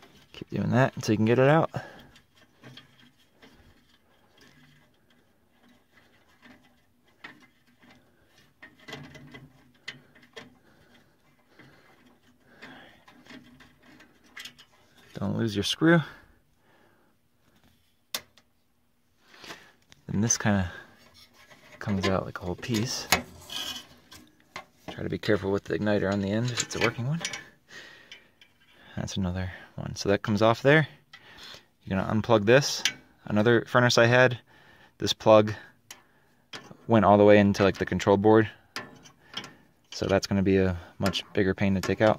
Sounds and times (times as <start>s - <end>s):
Speech: 0.4s - 1.9s, 15.2s - 16.2s, 20.1s - 20.9s, 21.8s - 23.2s, 24.9s - 27.4s, 28.9s - 31.0s, 31.8s - 34.4s, 35.0s - 35.7s, 36.9s - 38.6s, 40.0s - 42.1s.